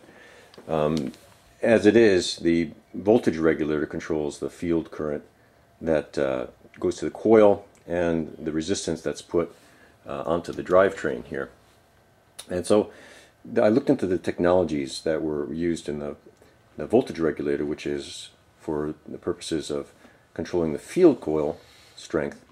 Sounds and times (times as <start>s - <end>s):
Speech: 0.7s - 11.6s, 12.4s - 22.5s.